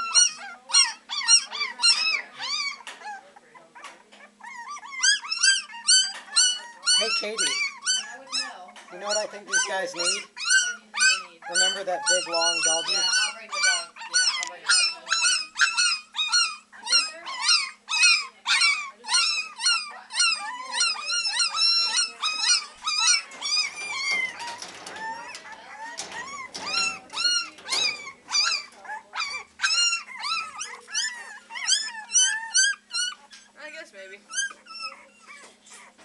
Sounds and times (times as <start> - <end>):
Yip: 0.0 - 33.5, 34.3 - 35.9
Whimper (dog): 0.0 - 33.6, 34.3 - 36.0
Speech: 6.6 - 15.4, 18.2 - 22.6.